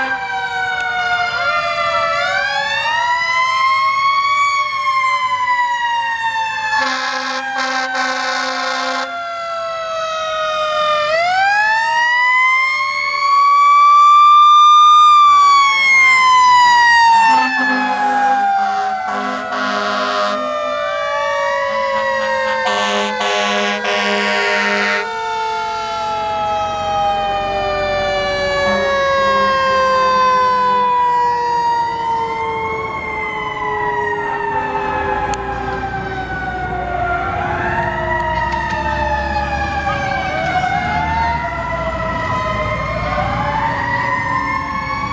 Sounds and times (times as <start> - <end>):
Fire engine, fire truck (siren): 0.0 - 45.1
Police car (siren): 0.0 - 45.1.